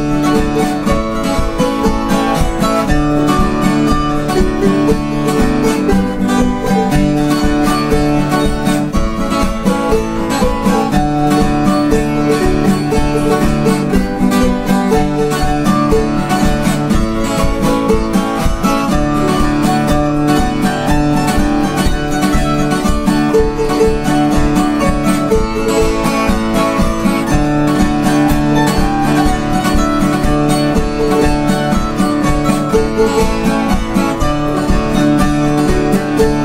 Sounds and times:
Music: 0:00.0 - 0:36.4.

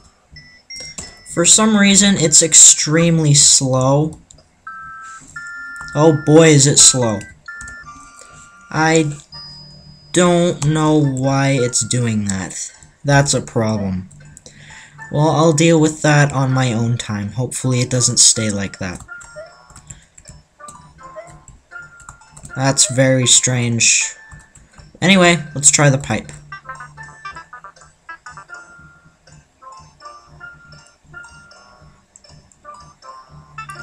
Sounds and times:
Music: 0:00.0 - 0:33.8
Speech: 0:01.4 - 0:04.2, 0:06.0 - 0:07.3, 0:08.8 - 0:09.2, 0:10.2 - 0:14.1, 0:15.1 - 0:19.0, 0:22.6 - 0:24.2, 0:25.0 - 0:26.4.

